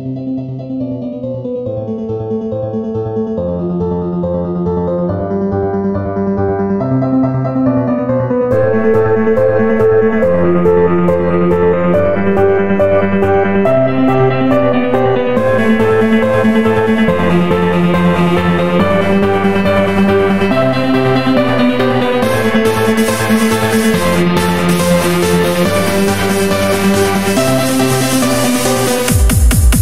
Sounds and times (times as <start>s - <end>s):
Electronic music: 0.0s - 29.8s.